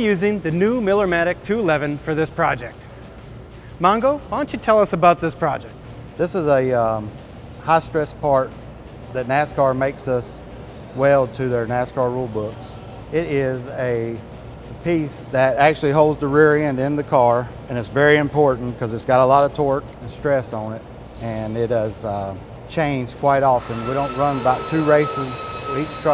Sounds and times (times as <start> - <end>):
Speech: 0.0 - 2.8, 3.8 - 8.5, 9.2 - 10.4, 11.0 - 14.2, 14.8 - 26.1
Music: 0.0 - 26.1.